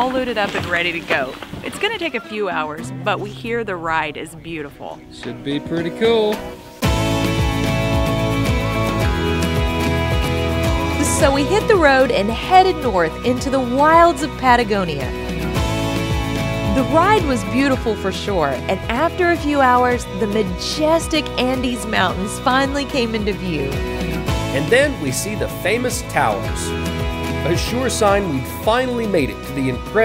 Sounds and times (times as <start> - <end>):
Speech: 0.0 - 6.4, 16.7 - 23.8, 24.6 - 26.7, 27.5 - 30.0
Music: 1.6 - 30.0.